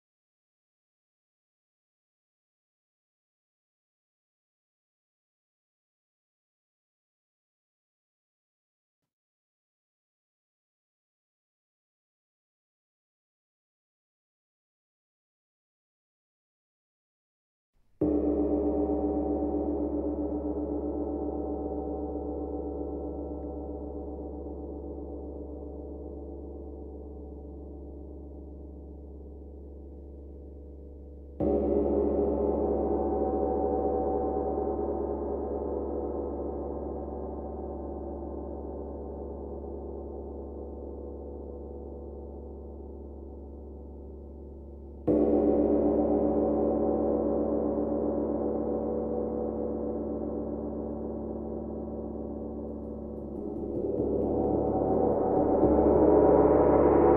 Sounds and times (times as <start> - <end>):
Gong: 18.0 - 57.1.